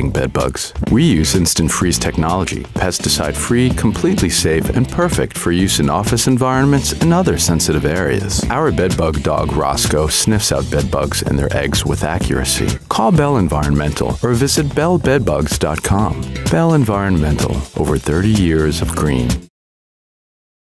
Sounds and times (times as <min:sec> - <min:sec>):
Music: 0:00.0 - 0:19.5
Speech: 0:00.0 - 0:19.5.